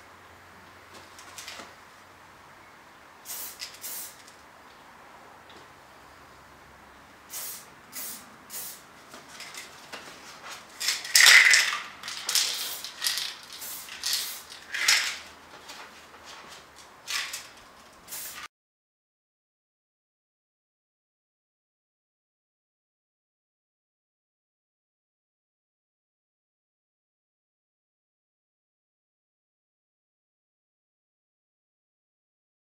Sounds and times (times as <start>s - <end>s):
Spray: 3.2s - 4.4s, 7.3s - 8.9s, 11.1s - 15.2s, 18.0s - 18.5s.